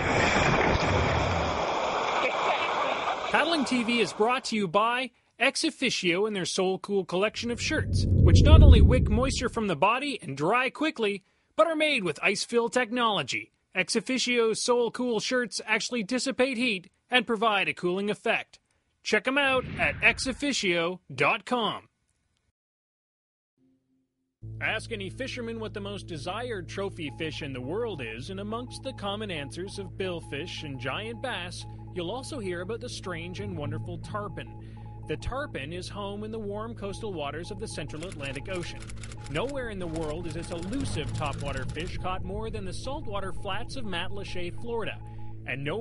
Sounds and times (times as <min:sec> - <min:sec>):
Speech: 0:02.2 - 0:21.9, 0:24.6 - 0:45.8.